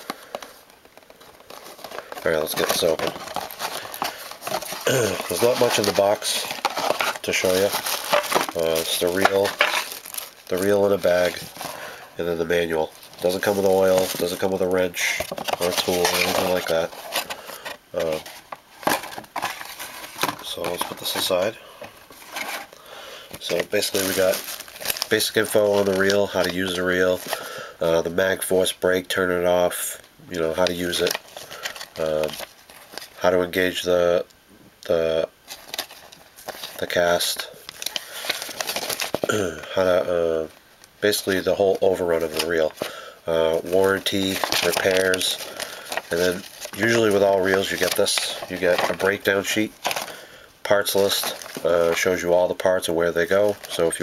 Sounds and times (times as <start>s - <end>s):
Inside, small room: 0.0s - 54.0s
Speech: 2.2s - 3.2s, 4.9s - 6.6s, 7.2s - 7.8s, 8.5s - 9.6s, 10.5s - 11.5s, 12.2s - 16.9s, 17.9s - 18.2s, 20.4s - 21.6s, 23.4s - 24.4s, 25.1s - 31.2s, 32.0s - 32.4s, 33.2s - 35.3s, 36.8s - 37.6s, 39.3s - 45.4s, 46.1s - 49.7s, 50.6s - 54.0s.